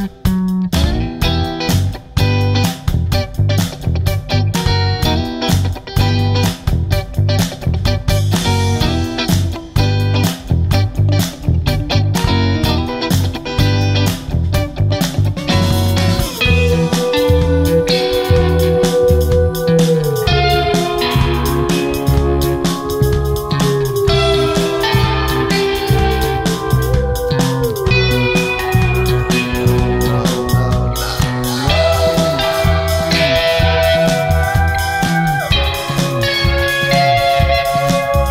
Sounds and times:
Electric guitar: 0.0 - 38.3.

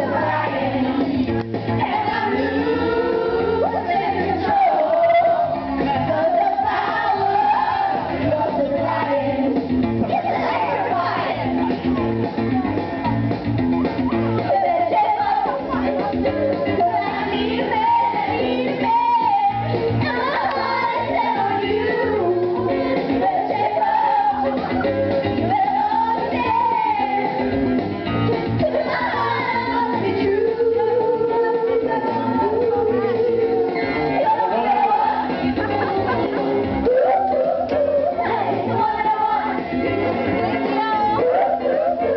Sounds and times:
Music: 0.0 - 42.1
Female singing: 1.9 - 9.2, 14.5 - 24.4, 28.7 - 36.2, 40.6 - 42.1.

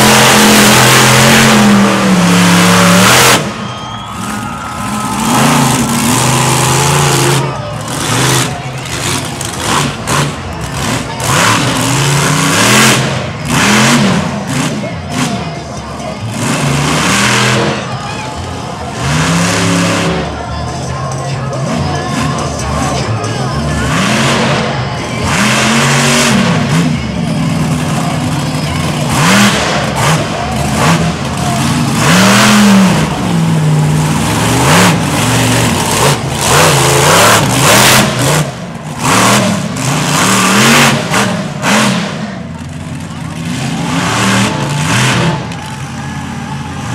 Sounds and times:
Truck: 0.0 - 46.9
Music: 18.3 - 25.3.

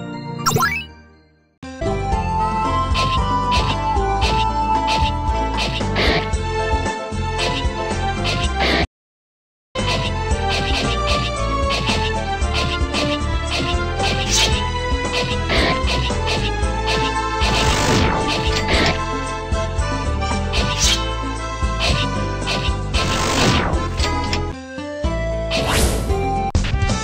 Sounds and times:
Music: 0.0 - 8.9, 9.8 - 27.0.

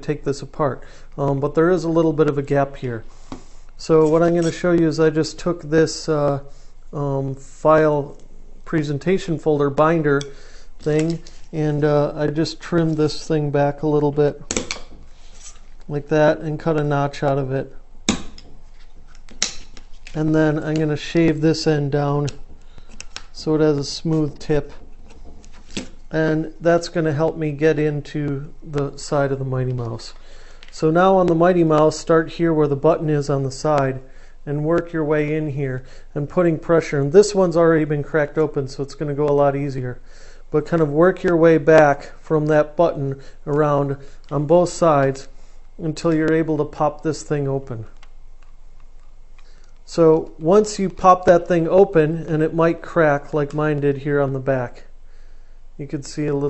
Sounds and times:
Speech: 0.0 - 3.1, 3.8 - 14.4, 15.9 - 17.8, 20.2 - 22.4, 23.4 - 24.8, 26.1 - 47.9, 49.9 - 54.9, 55.8 - 56.4.

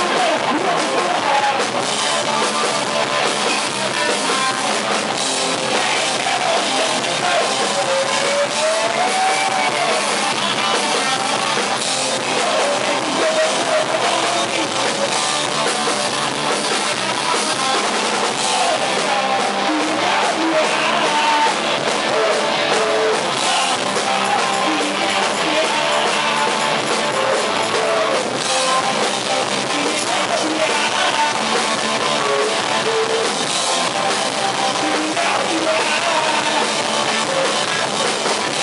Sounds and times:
Guitar: 0.0 - 38.6.

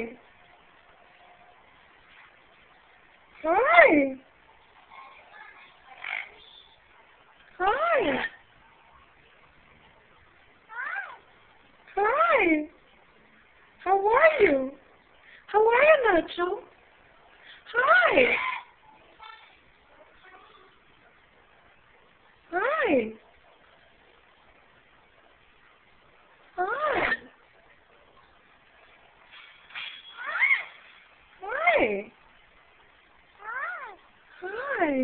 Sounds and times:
Speech: 3.4 - 4.2, 13.8 - 14.8, 22.5 - 23.2, 34.4 - 35.0.

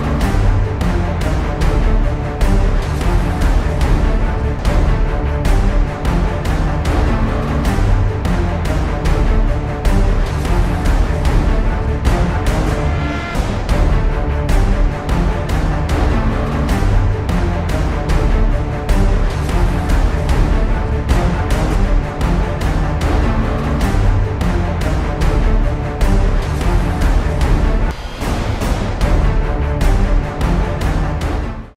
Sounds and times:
Music: 0.0 - 31.7.

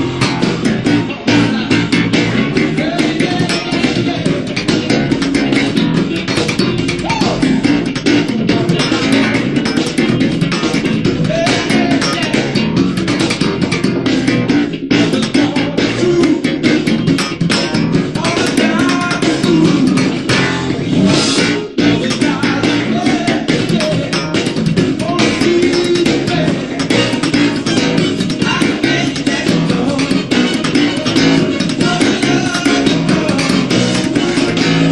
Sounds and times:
Music: 0.0 - 34.9.

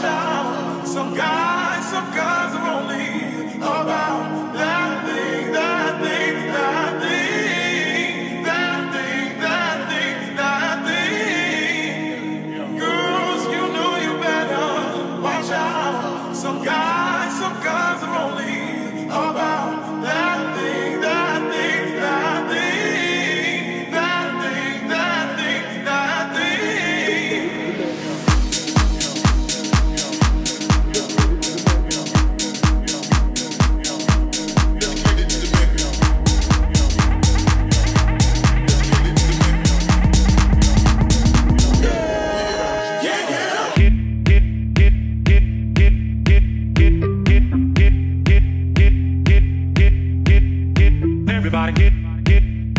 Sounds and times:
Disco: 19.2 - 52.7.

